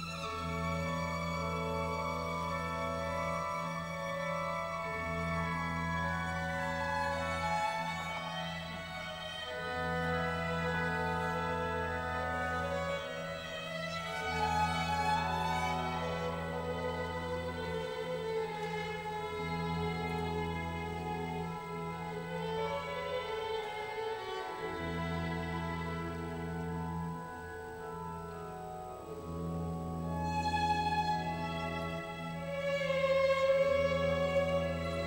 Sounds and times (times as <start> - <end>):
Violin, fiddle: 0.0 - 35.0.